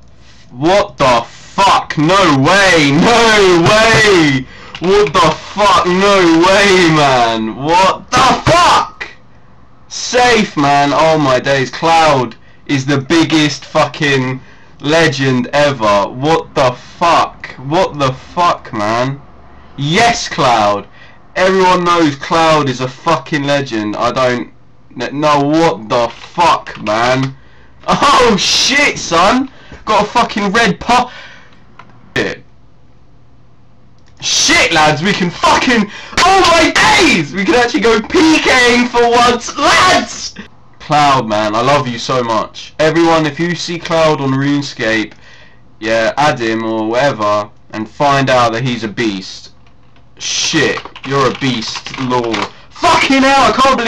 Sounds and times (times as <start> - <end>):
Speech: 0.5 - 9.2, 9.9 - 19.2, 19.8 - 31.1, 32.1 - 32.5, 34.2 - 45.2, 45.8 - 49.6, 50.2 - 53.8.